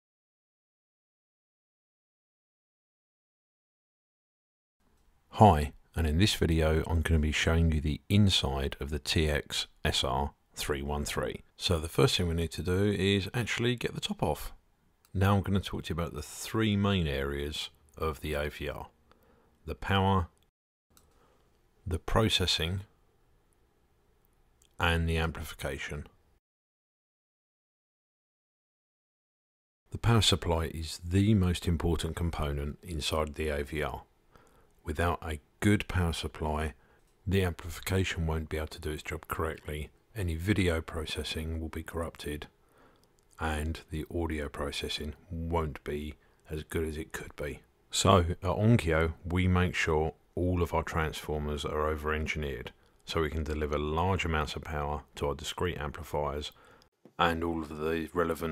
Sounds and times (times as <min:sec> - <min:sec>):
Speech: 0:05.3 - 0:19.0, 0:19.6 - 0:20.4, 0:21.8 - 0:22.9, 0:24.8 - 0:26.2, 0:29.9 - 0:34.1, 0:34.8 - 0:42.6, 0:43.4 - 0:56.6, 0:57.2 - 0:58.5.